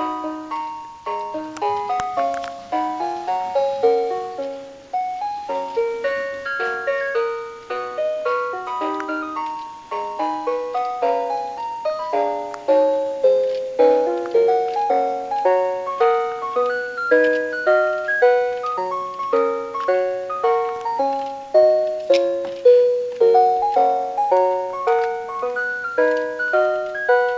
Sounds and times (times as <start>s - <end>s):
Inside, small room: 0.0s - 27.3s
Piano: 0.0s - 27.3s.